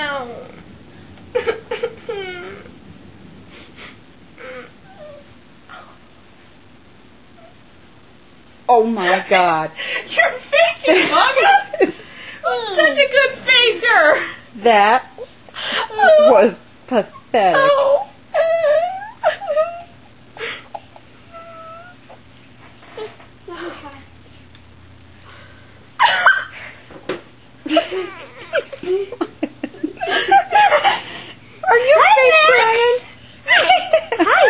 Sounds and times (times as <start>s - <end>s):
Giggle: 26.0s - 26.7s, 27.6s - 31.2s, 33.5s - 34.4s.